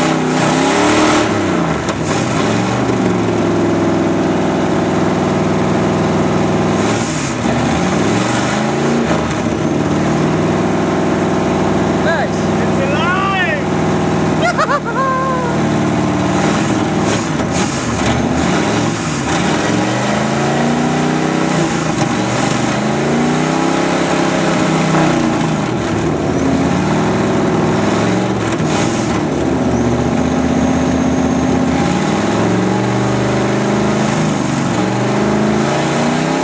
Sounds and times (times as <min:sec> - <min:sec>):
Speech: 0:12.0 - 0:13.7.